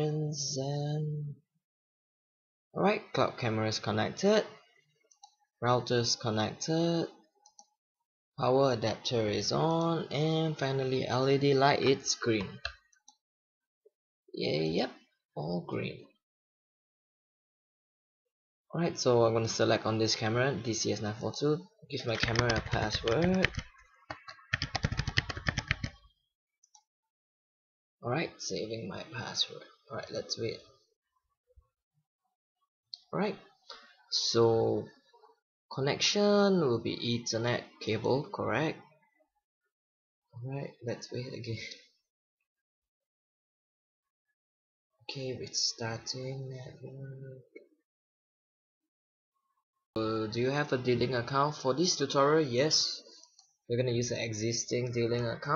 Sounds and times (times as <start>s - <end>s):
Speech: 0.0s - 1.4s, 2.8s - 4.6s, 5.6s - 7.2s, 8.4s - 12.7s, 14.4s - 16.2s, 18.7s - 23.6s, 28.0s - 30.8s, 33.0s - 33.5s, 34.1s - 35.1s, 35.7s - 38.9s, 40.4s - 42.0s, 45.1s - 47.7s, 50.0s - 55.5s.